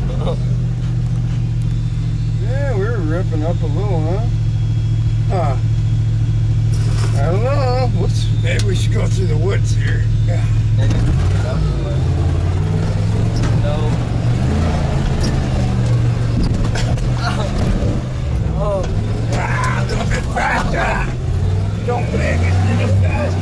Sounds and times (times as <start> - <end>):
Vehicle: 0.0 - 23.4
Speech: 2.4 - 4.4, 7.1 - 12.1, 18.6 - 21.2, 21.8 - 23.4.